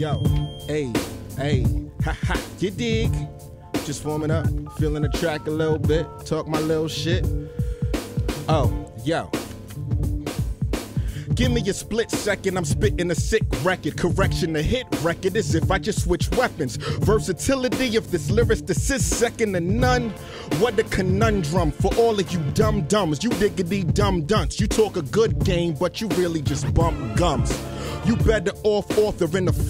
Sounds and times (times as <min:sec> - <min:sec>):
Music: 0:00.0 - 0:29.6.